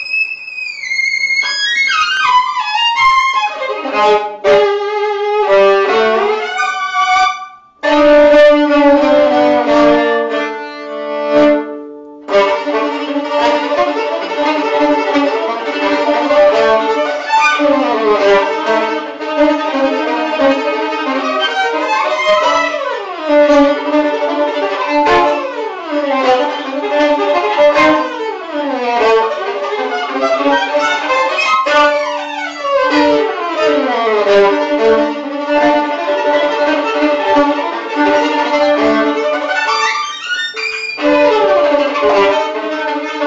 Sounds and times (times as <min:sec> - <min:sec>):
Violin, fiddle: 0:00.0 - 0:43.2.